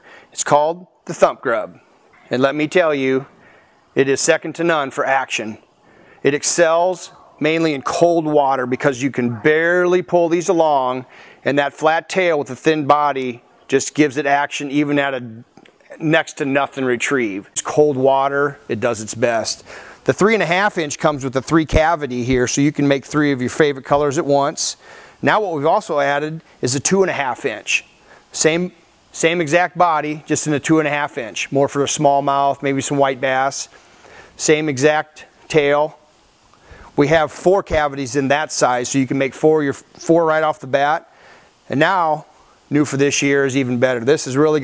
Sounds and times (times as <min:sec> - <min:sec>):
Speech: 0:00.4 - 0:03.3, 0:04.0 - 0:05.6, 0:06.2 - 0:33.7, 0:34.4 - 0:36.0, 0:37.0 - 0:41.1, 0:41.7 - 0:44.6.